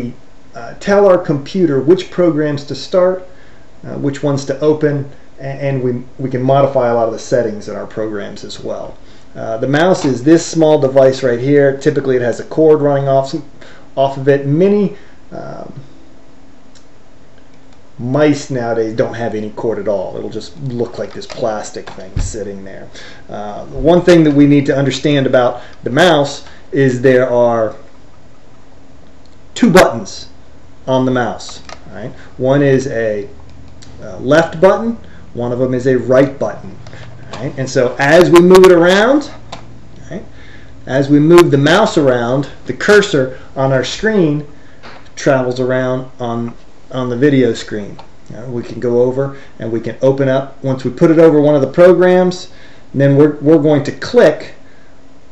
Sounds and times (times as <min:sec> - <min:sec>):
Speech: 0:00.0 - 0:15.9, 0:18.0 - 0:27.9, 0:29.6 - 0:39.4, 0:40.0 - 0:40.3, 0:40.9 - 0:44.5, 0:45.1 - 0:54.6.